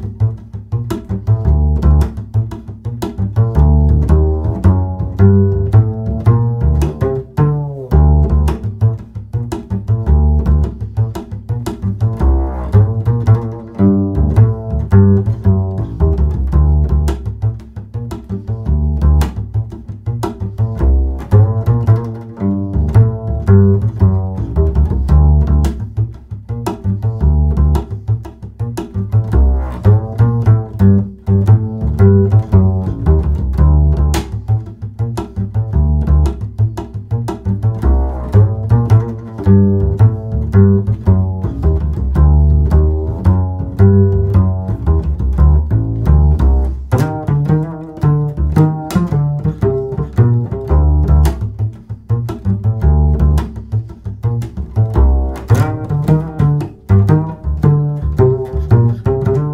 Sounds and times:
Music: 0.0 - 59.5.

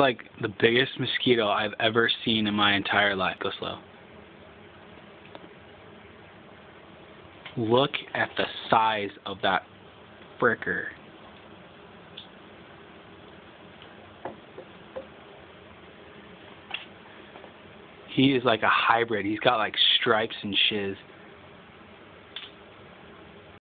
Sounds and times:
Speech: 0.0 - 3.8, 7.5 - 9.7, 10.4 - 11.0, 18.1 - 21.1.

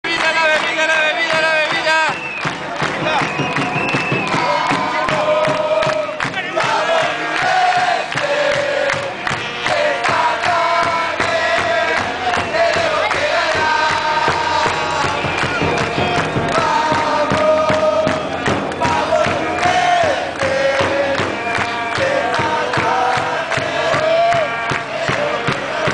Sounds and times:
Cheering: 0.1 - 25.9
Music: 0.1 - 25.9.

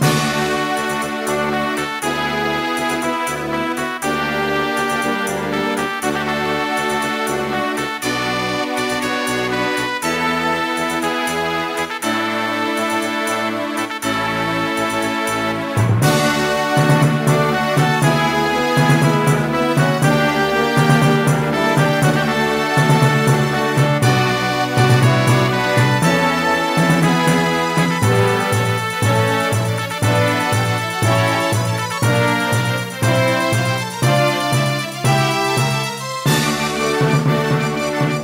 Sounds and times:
Soundtrack music: 0.0 - 38.2
Video game music: 0.0 - 38.2.

